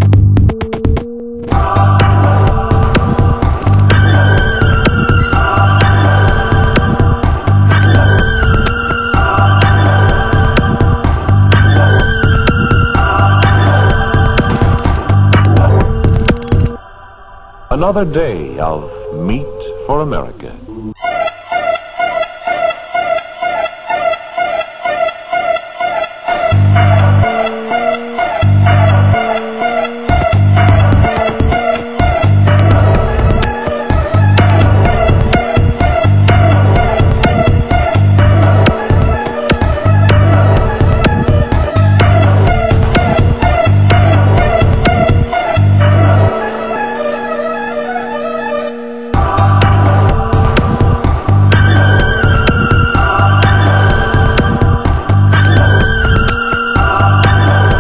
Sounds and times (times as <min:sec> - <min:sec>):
Music: 0:00.0 - 0:57.8
Speech: 0:17.7 - 0:21.0.